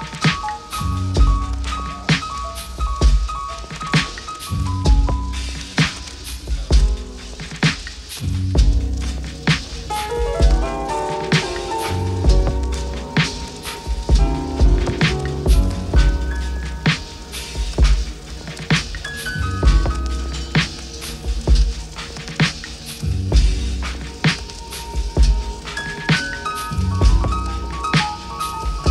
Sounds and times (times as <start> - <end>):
Music: 0.0 - 28.9.